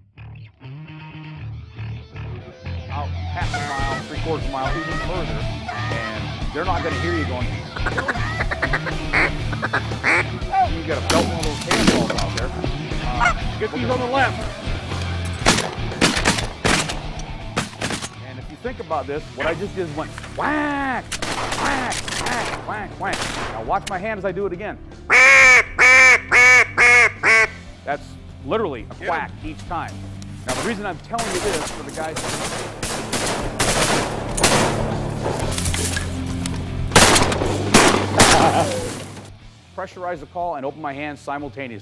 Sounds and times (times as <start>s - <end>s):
Music: 0.0s - 41.8s
Speech: 2.9s - 7.5s, 10.6s - 14.4s, 18.2s - 21.0s, 21.6s - 24.8s, 27.9s - 32.2s, 39.8s - 41.8s
Quack: 7.7s - 10.4s, 25.1s - 27.6s.